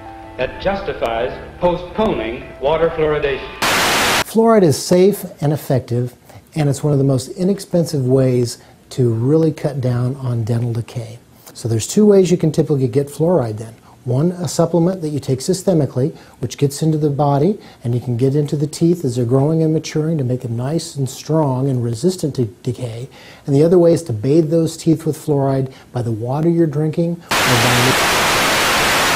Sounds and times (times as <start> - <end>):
Speech: 0.4 - 3.5, 4.3 - 28.0.